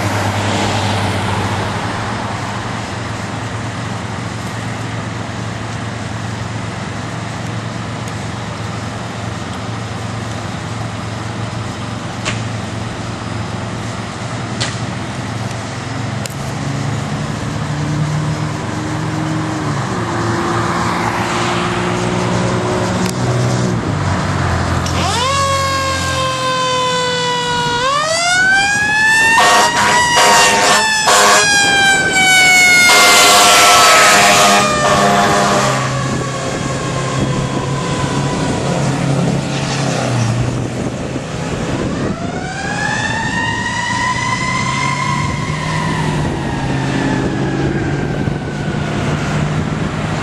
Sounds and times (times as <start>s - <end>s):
Medium engine (mid frequency): 0.0s - 26.4s
Vehicle: 0.0s - 50.2s
Accelerating, revving, vroom: 16.1s - 50.2s.